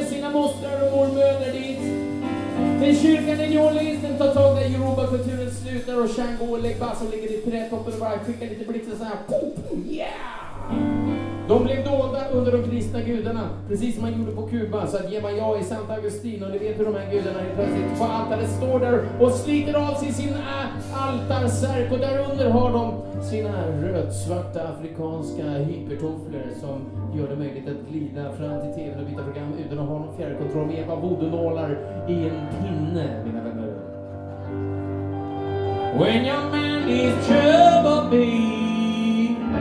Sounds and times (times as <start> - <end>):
Speech: 0.0 - 2.0, 2.8 - 10.8, 11.5 - 34.0
Music: 0.0 - 39.6.